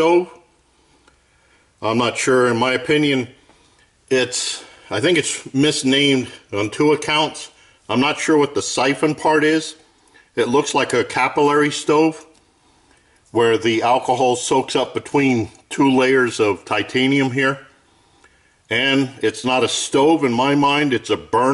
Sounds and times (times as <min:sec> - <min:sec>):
Speech: 0:00.0 - 0:00.5, 0:01.8 - 0:03.4, 0:04.1 - 0:09.8, 0:10.4 - 0:12.4, 0:13.3 - 0:17.8, 0:18.7 - 0:21.5.